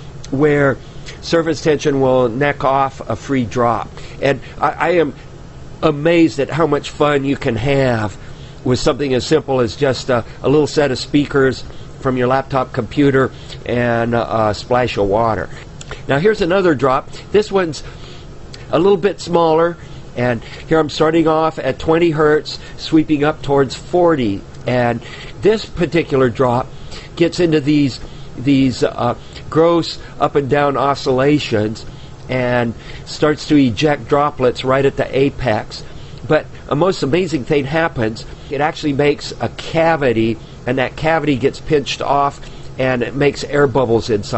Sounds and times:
Speech: 0.3s - 5.2s, 5.8s - 17.9s, 18.6s - 44.3s.

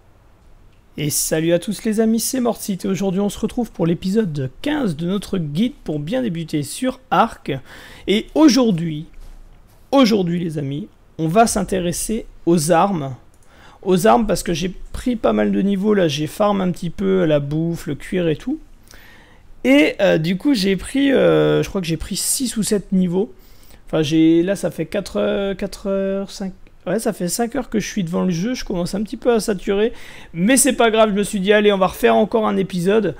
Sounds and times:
Speech: 1.0s - 9.2s, 9.9s - 13.2s, 13.8s - 18.7s, 19.6s - 33.2s.

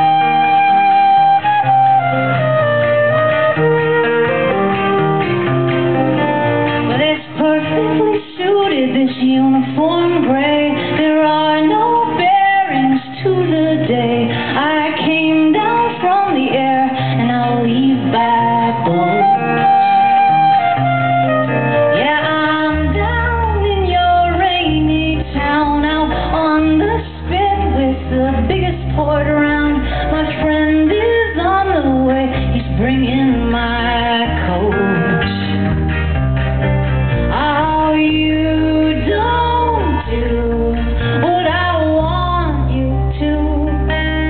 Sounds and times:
Inside, large room or hall: 0.0s - 44.3s
Music: 0.0s - 44.3s.

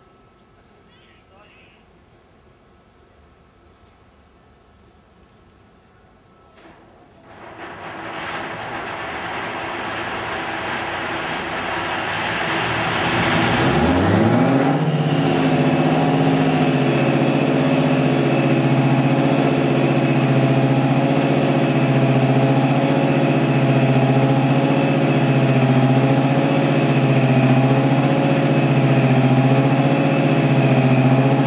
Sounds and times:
Heavy engine (low frequency): 0.0s - 31.4s
Vehicle: 0.0s - 31.4s
Idling: 7.3s - 31.4s.

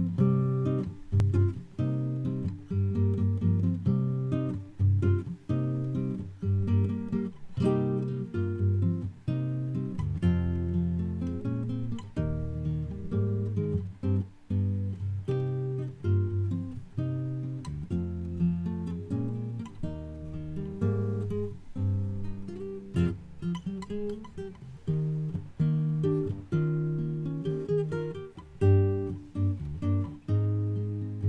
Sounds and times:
Strum: 0.0s - 31.2s.

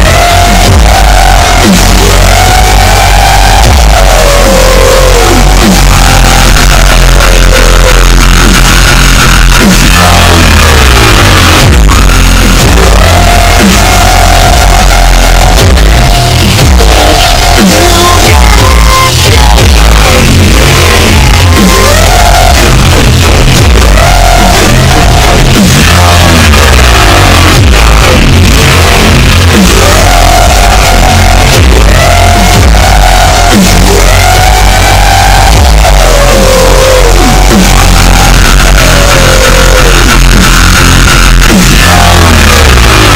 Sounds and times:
Dubstep: 0.0s - 43.1s.

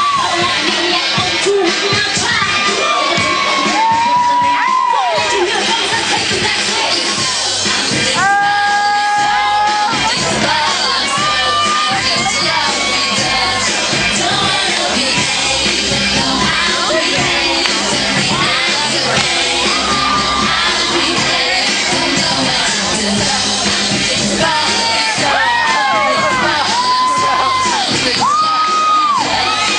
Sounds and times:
Choir: 0.0s - 29.7s
Female singing: 0.0s - 29.7s.

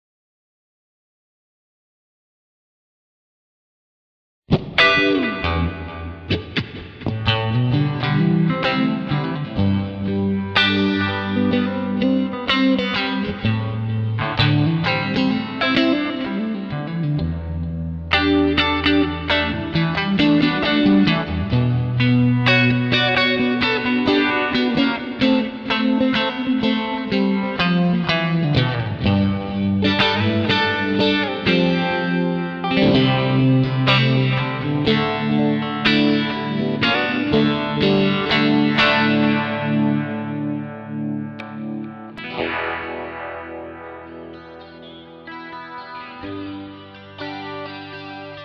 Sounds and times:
Effects unit: 4.5s - 48.4s
Music: 4.5s - 48.4s.

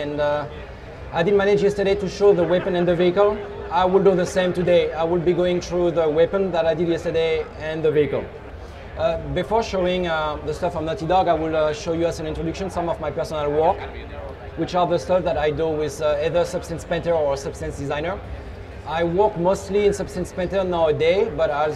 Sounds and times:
Speech: 0.0s - 8.3s, 9.0s - 18.2s, 18.9s - 21.7s.

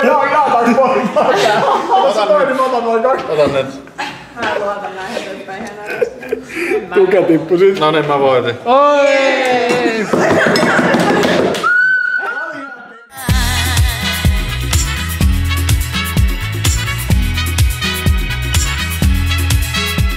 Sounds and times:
Laughter: 0.0s - 2.7s, 4.0s - 7.0s, 10.0s - 11.6s
Music: 13.2s - 20.1s.

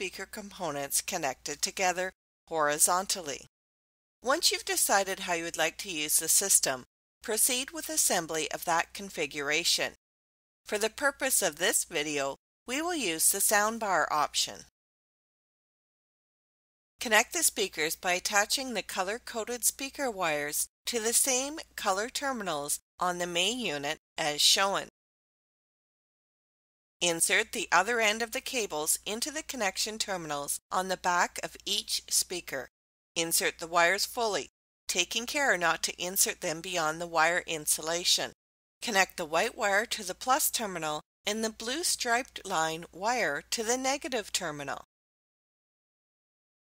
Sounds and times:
Speech: 0.0s - 3.5s, 4.2s - 10.0s, 10.7s - 14.7s, 17.0s - 24.9s, 27.0s - 44.9s.

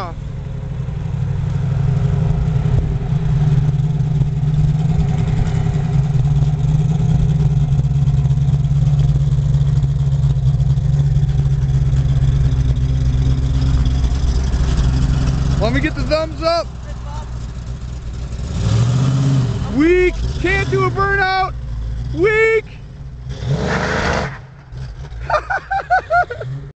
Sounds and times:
Speech: 15.6s - 17.3s, 19.6s - 21.5s, 22.1s - 22.8s.

